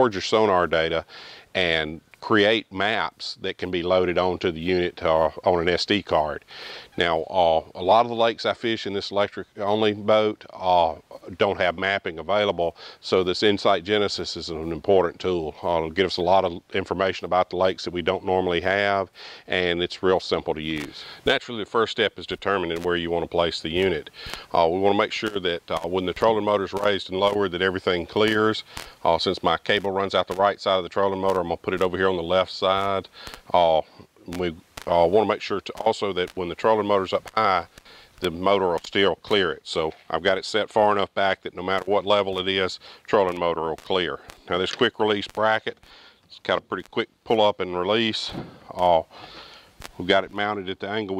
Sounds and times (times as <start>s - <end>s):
Speech: 0.0s - 49.2s, 50.0s - 51.2s.